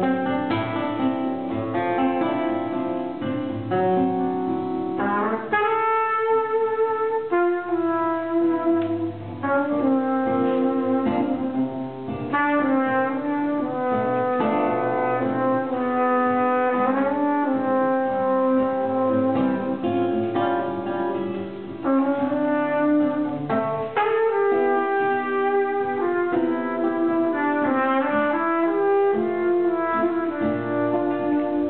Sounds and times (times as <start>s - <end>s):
Guitar: 0.0s - 31.6s
Jazz: 0.0s - 31.6s
Trumpet: 0.0s - 31.6s.